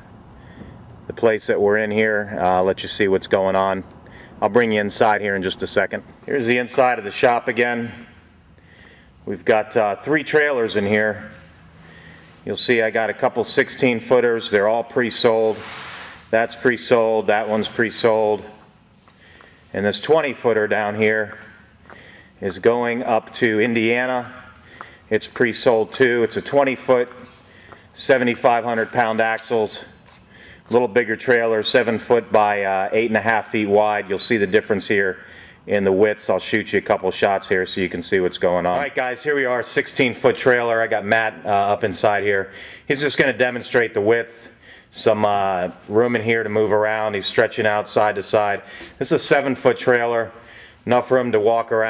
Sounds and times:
Speech: 0:01.1 - 0:08.2, 0:09.3 - 0:11.5, 0:12.4 - 0:15.7, 0:16.3 - 0:18.6, 0:19.7 - 0:21.6, 0:22.4 - 0:24.5, 0:25.1 - 0:27.3, 0:28.0 - 0:30.0, 0:30.7 - 0:51.9.

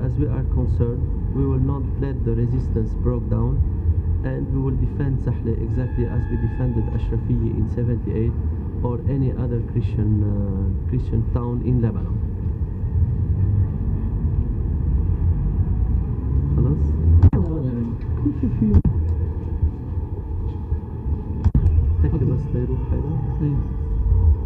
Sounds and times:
Speech: 0:00.0 - 0:03.6, 0:04.2 - 0:12.2, 0:22.0 - 0:23.7
Rumble: 0:00.0 - 0:24.4.

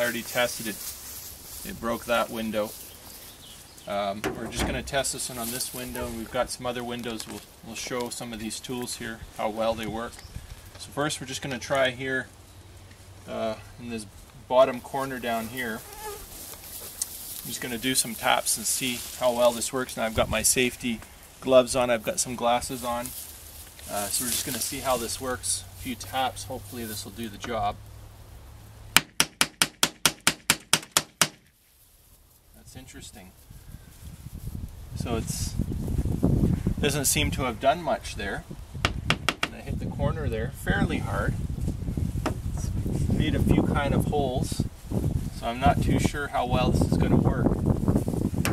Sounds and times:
Speech: 0:00.0 - 0:00.8, 0:01.6 - 0:02.8, 0:03.9 - 0:10.2, 0:10.8 - 0:12.3, 0:13.3 - 0:15.8, 0:17.4 - 0:23.2, 0:23.8 - 0:27.8, 0:32.6 - 0:33.4, 0:35.0 - 0:35.6, 0:36.8 - 0:38.5, 0:39.5 - 0:41.4, 0:42.6 - 0:44.7, 0:45.4 - 0:47.5.

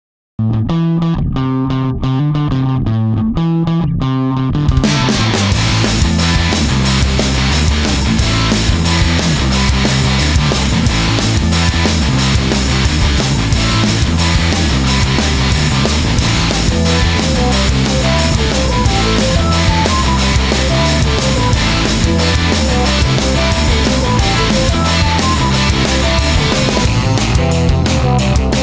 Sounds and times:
Bass guitar: 0:00.4 - 0:28.6
Distortion: 0:00.4 - 0:28.6
Effects unit: 0:00.4 - 0:28.6
Electric guitar: 0:00.4 - 0:28.6.

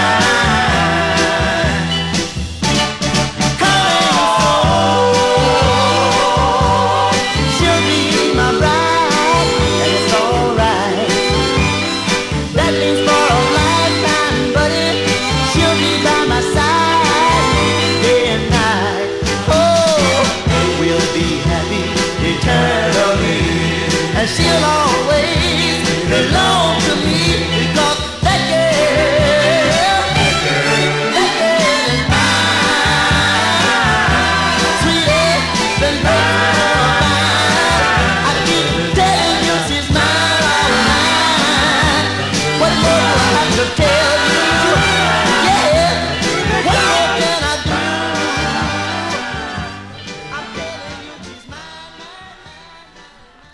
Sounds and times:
Ska: 0:00.0 - 0:53.5.

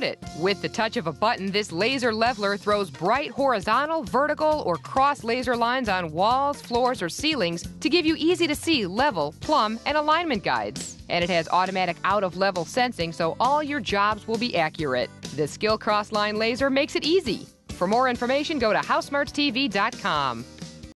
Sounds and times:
Speech: 0:00.0 - 0:20.4
Music: 0:00.0 - 0:20.9.

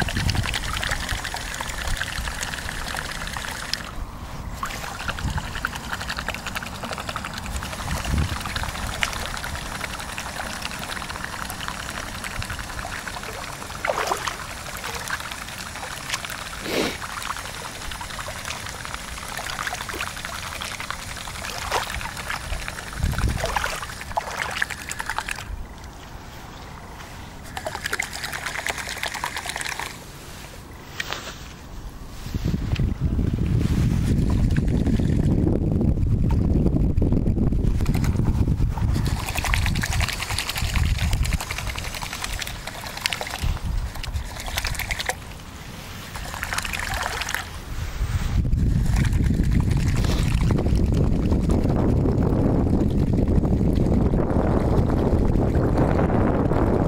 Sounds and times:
Gurgling: 0:04.6 - 0:25.5.

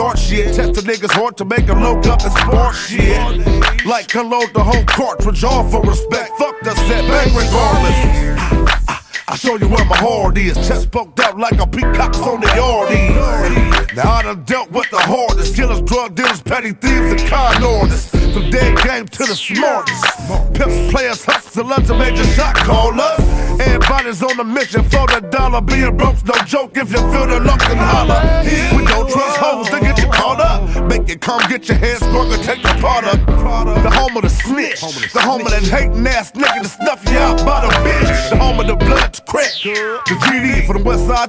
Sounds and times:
Music: 0:00.0 - 0:41.2.

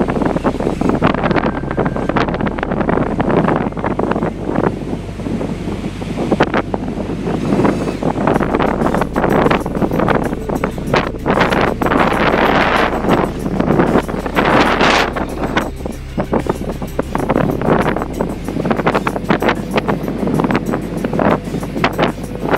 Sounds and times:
Car: 0:00.0 - 0:22.5.

